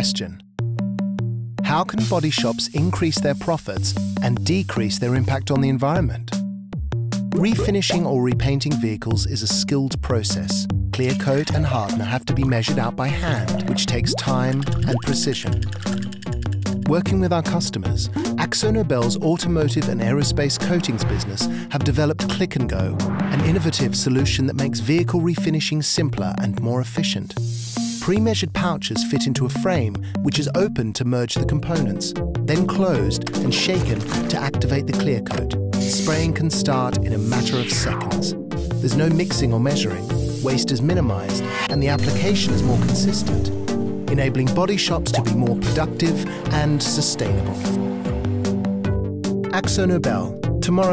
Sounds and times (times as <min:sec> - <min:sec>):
Speech: 0:00.0 - 0:00.4, 0:01.6 - 0:06.4, 0:07.4 - 0:15.6, 0:16.8 - 0:27.4, 0:28.0 - 0:43.5, 0:44.1 - 0:47.7, 0:49.5 - 0:50.9
Music: 0:00.0 - 0:50.9
Spray: 0:02.0 - 0:05.4, 0:35.8 - 0:36.2, 0:38.6 - 0:40.6.